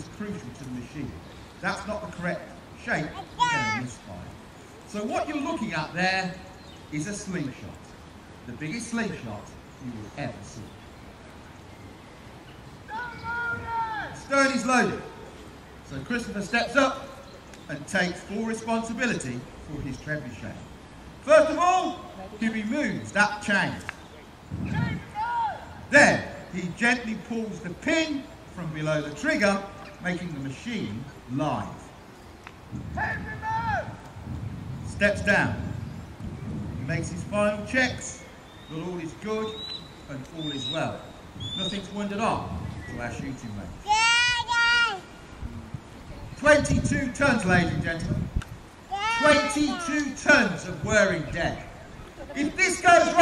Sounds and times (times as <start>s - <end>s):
Outside, rural or natural: 0.0s - 53.2s
Speech: 49.2s - 53.2s.